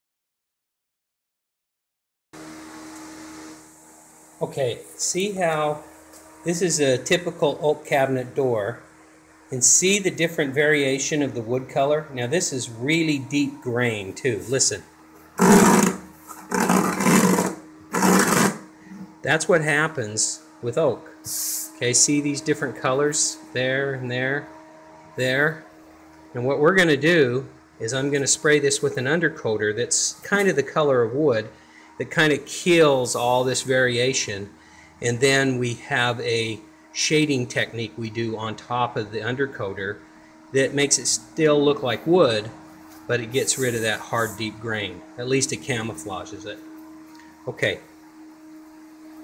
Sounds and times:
Speech: 4.4 - 5.9, 6.5 - 8.8, 9.5 - 14.9, 19.2 - 24.5, 25.2 - 25.6, 26.4 - 46.7, 47.5 - 47.9
Wood: 15.4 - 18.6.

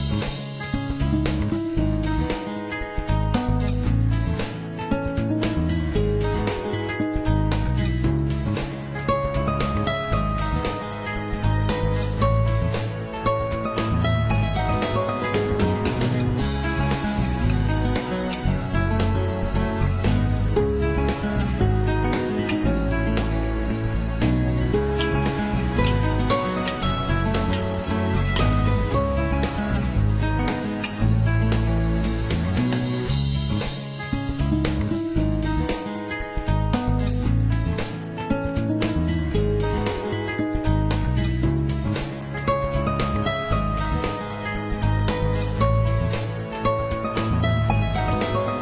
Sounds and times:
Music: 0.0 - 48.6.

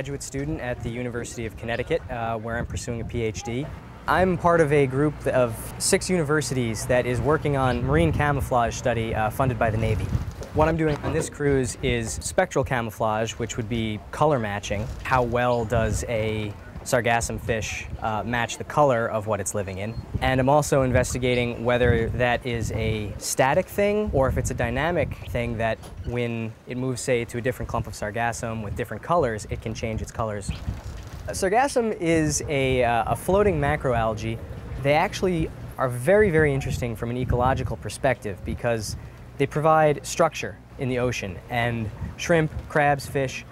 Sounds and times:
Speech: 0.0 - 30.6, 31.3 - 43.5.

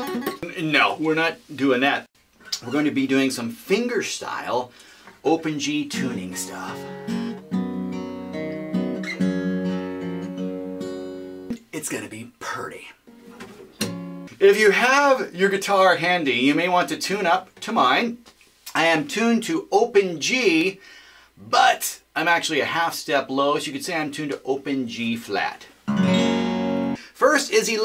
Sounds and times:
Speech: 0.0 - 6.8, 11.5 - 13.0, 14.4 - 20.8, 21.4 - 25.7, 27.2 - 27.8
Acoustic guitar: 4.8 - 12.0, 12.6 - 14.4, 25.8 - 27.0
Strum: 13.1 - 14.3, 25.9 - 27.0.

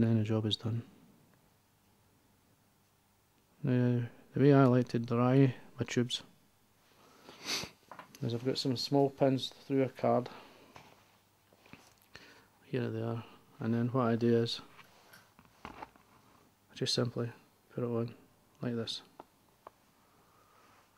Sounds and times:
Speech: 0.0 - 0.9, 3.6 - 6.3, 8.2 - 10.4, 12.6 - 14.7, 16.7 - 19.1
Inside, small room: 0.0 - 20.9.

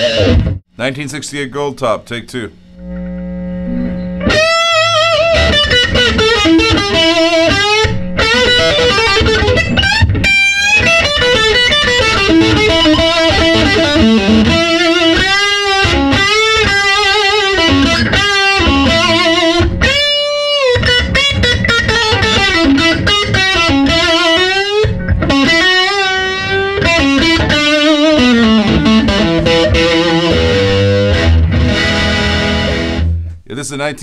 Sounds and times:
Music: 0.0 - 0.6, 3.8 - 33.4
Speech: 0.8 - 2.6, 33.5 - 34.0.

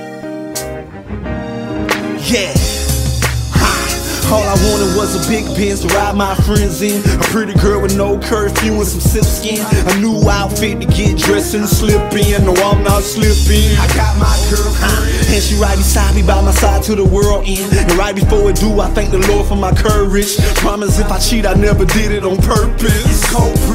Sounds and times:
Music: 0.0 - 23.7.

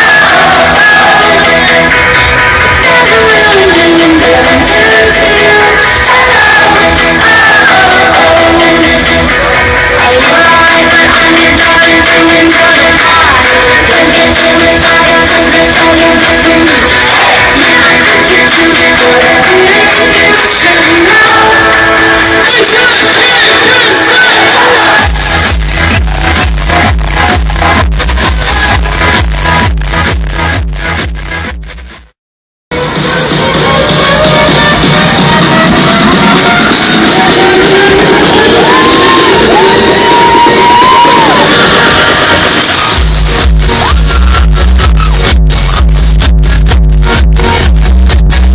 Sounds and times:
Exciting music: 0.0 - 32.0, 32.8 - 48.5.

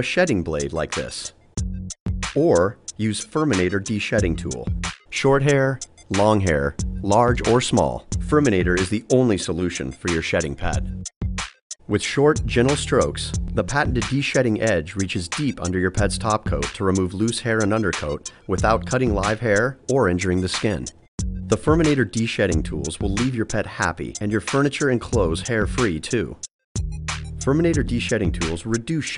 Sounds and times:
Speech: 0.0 - 1.4, 2.4 - 10.9, 11.9 - 26.4, 27.4 - 29.1
Music: 0.0 - 29.1.

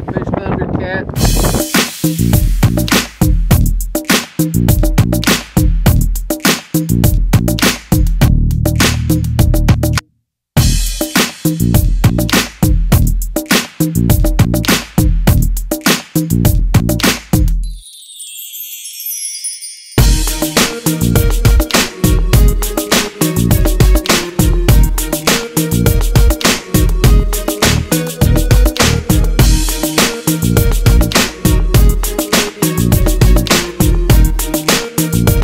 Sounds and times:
Music: 1.2 - 10.0, 10.6 - 35.4.

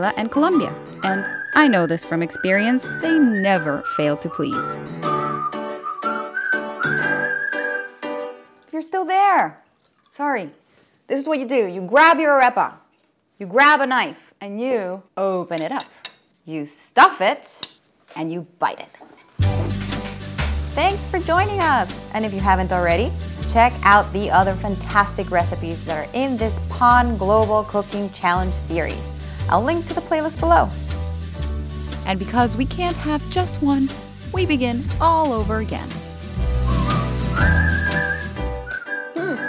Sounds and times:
Speech: 0.0 - 4.8, 8.7 - 9.6, 10.2 - 12.8, 13.4 - 15.9, 16.5 - 19.0, 20.8 - 30.8, 32.1 - 36.0.

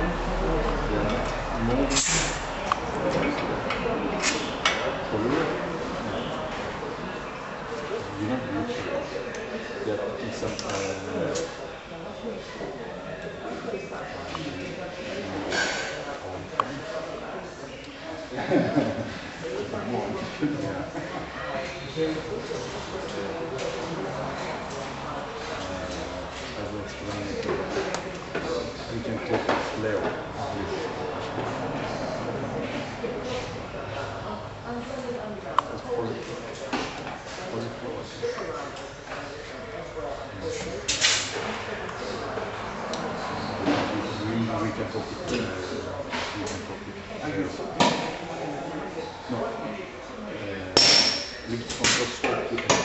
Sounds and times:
Speech: 0.0 - 52.8.

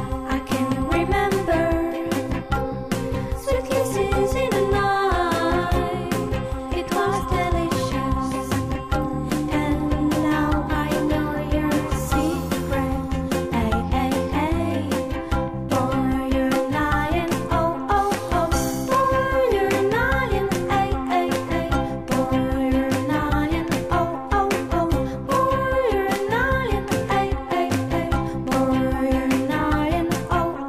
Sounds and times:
Music: 0.0 - 30.6.

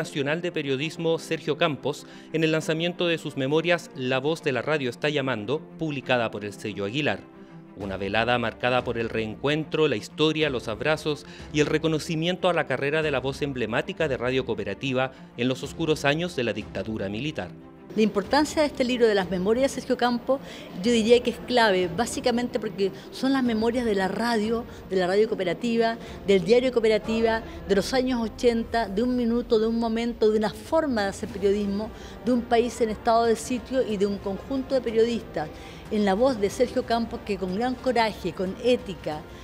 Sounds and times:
Music: 0.0 - 39.4.

